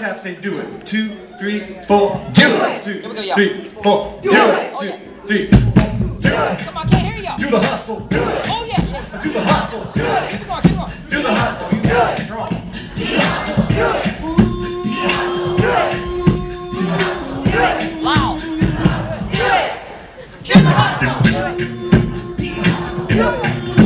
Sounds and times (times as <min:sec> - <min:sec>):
Music: 0:05.3 - 0:19.8, 0:20.4 - 0:23.8.